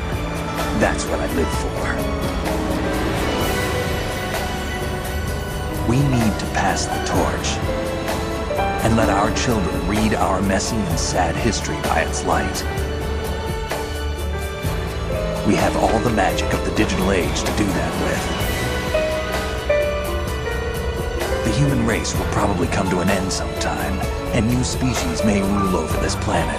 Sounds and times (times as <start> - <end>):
Music: 0.0 - 26.5
Male speech, man speaking: 0.7 - 2.1, 5.8 - 7.7, 8.8 - 12.7, 15.4 - 18.3, 21.4 - 26.5.